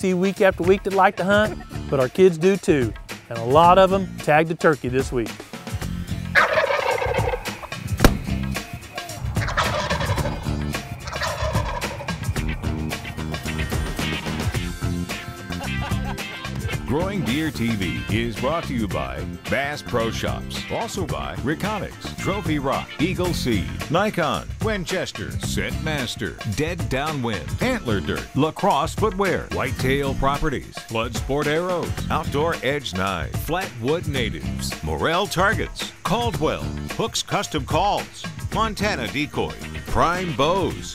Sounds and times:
Speech: 0.0s - 5.4s, 16.9s - 40.9s
Music: 0.0s - 40.9s.

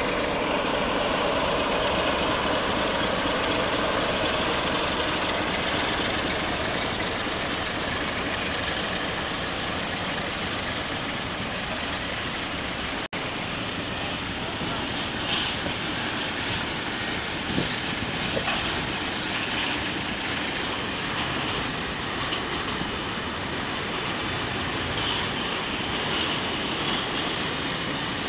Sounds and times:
Railroad car, train wagon: 0.0s - 28.2s
Train: 0.0s - 28.2s.

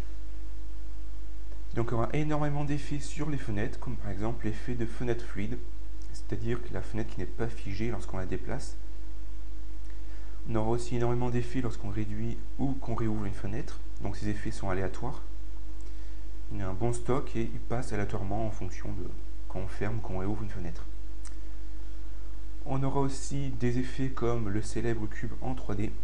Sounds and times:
Speech: 1.7s - 8.8s, 10.5s - 15.3s, 16.5s - 20.9s, 22.6s - 26.0s.

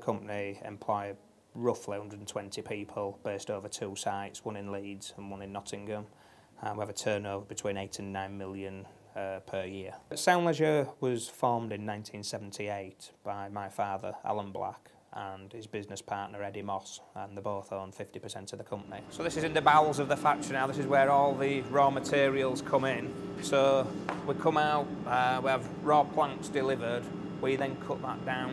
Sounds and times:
Speech: 0.0s - 28.5s.

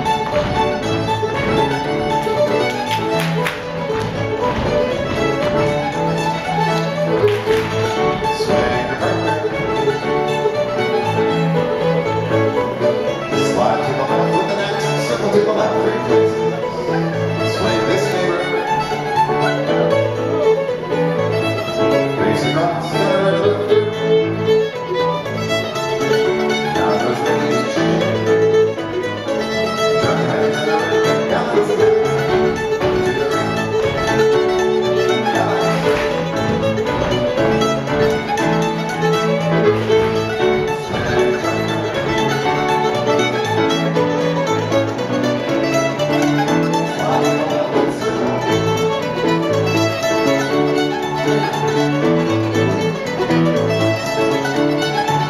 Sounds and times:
Music: 0.0s - 55.2s
Speech: 13.4s - 18.7s, 26.8s - 27.7s, 30.0s - 32.2s.

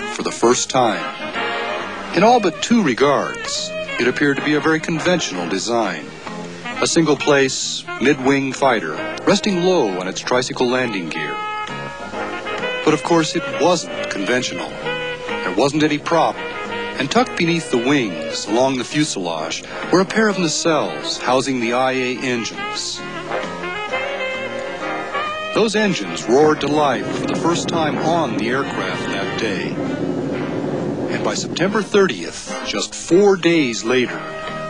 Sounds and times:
Speech: 0.0s - 1.1s, 2.2s - 6.1s, 6.8s - 11.4s, 12.9s - 14.8s, 15.4s - 16.4s, 17.0s - 23.0s, 25.6s - 29.8s, 31.1s - 34.2s
Music: 0.0s - 34.7s.

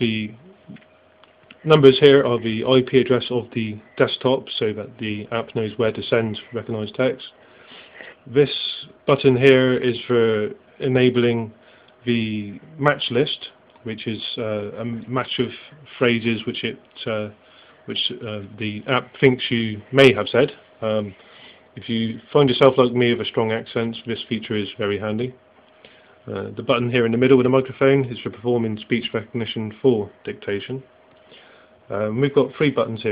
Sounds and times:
Male speech, man speaking: 0.0s - 0.5s, 1.6s - 7.4s, 8.3s - 21.2s, 21.8s - 25.4s, 26.3s - 30.9s, 31.9s - 33.1s.

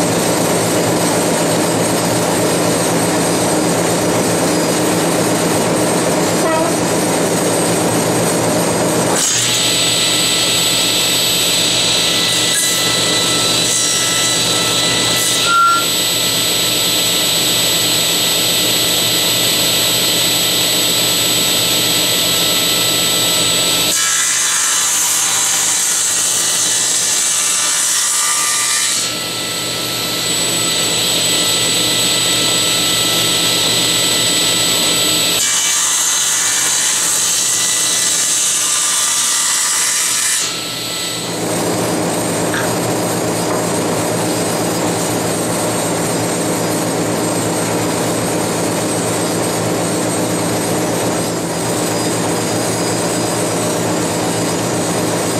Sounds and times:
Tools: 42.5s - 43.7s.

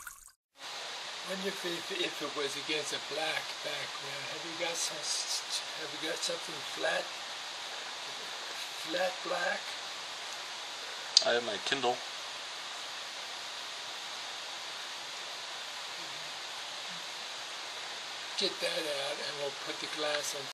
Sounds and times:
Speech: 1.2s - 7.1s, 8.7s - 9.8s, 11.2s - 12.0s, 18.4s - 20.5s.

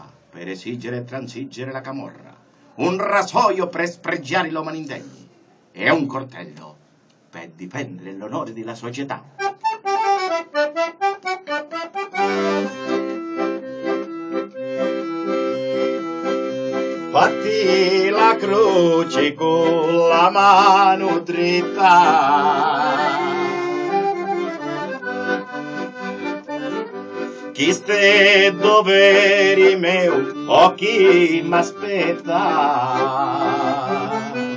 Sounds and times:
Speech: 0.0s - 6.8s, 7.4s - 9.3s
Music: 9.4s - 34.5s.

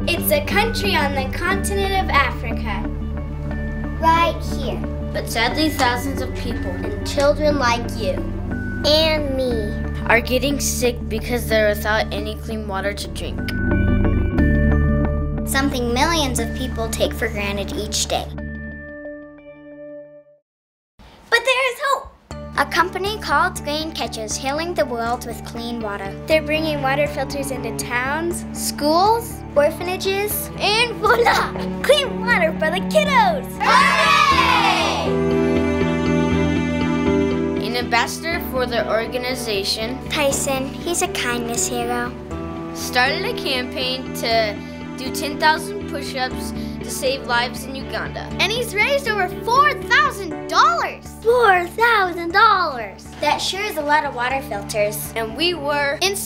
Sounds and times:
Music: 0.0s - 20.4s, 22.3s - 56.2s
Speech: 8.8s - 13.5s, 15.5s - 18.3s, 21.3s - 33.4s, 37.6s - 42.1s, 42.8s - 56.2s.

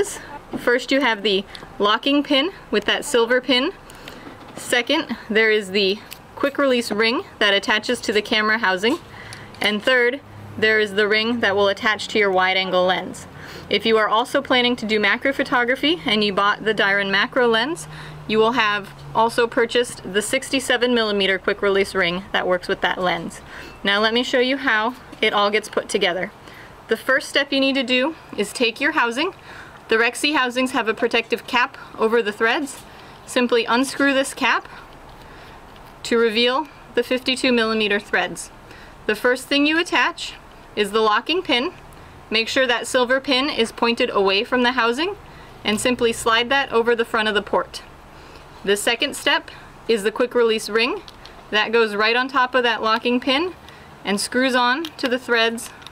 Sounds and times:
Speech: 0.0s - 3.8s, 4.6s - 9.0s, 9.6s - 34.7s, 36.0s - 38.5s, 39.1s - 47.9s, 48.6s - 55.8s.

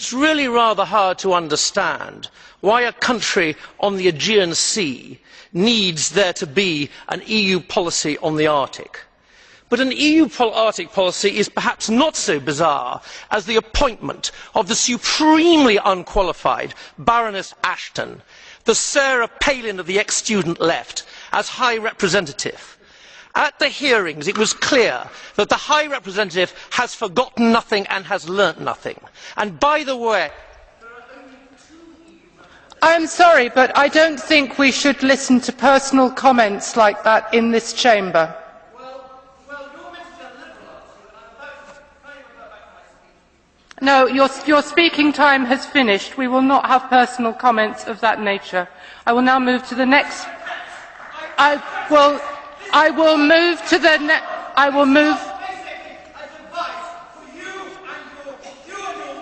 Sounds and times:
Male speech, man speaking: 0.0s - 9.1s, 9.7s - 22.8s, 23.4s - 43.2s, 43.8s - 59.2s
Narration, monologue: 0.0s - 59.2s.

